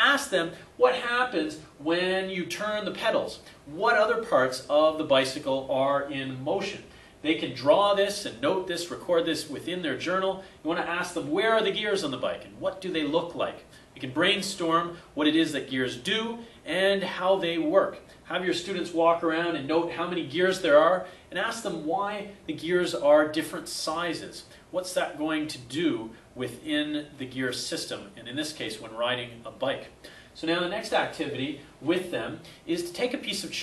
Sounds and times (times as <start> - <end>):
Speech: 0.0 - 33.6.